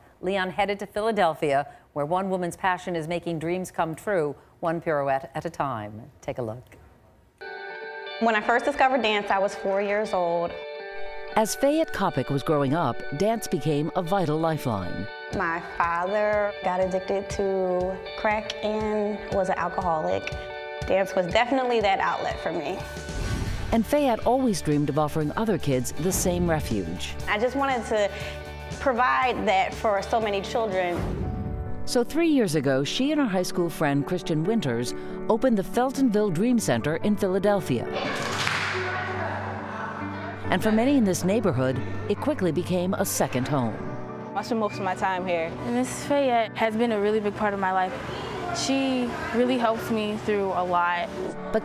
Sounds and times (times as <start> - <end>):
Music: 7.4 - 51.6.